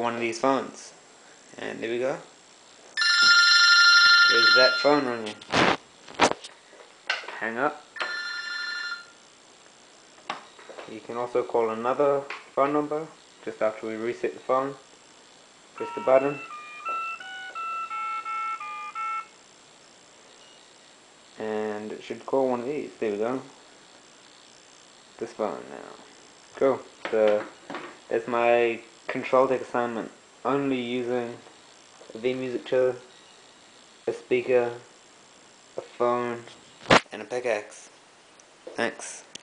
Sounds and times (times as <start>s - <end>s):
Speech: 0.0s - 2.3s, 4.3s - 5.4s, 7.3s - 7.8s, 10.9s - 14.9s, 15.8s - 16.5s, 21.4s - 23.5s, 25.2s - 27.5s, 28.1s - 31.4s, 32.1s - 33.1s, 34.1s - 34.9s, 35.8s - 36.5s, 37.1s - 38.0s, 38.7s - 39.3s
Telephone: 3.0s - 5.6s, 8.0s - 9.1s, 15.8s - 19.4s.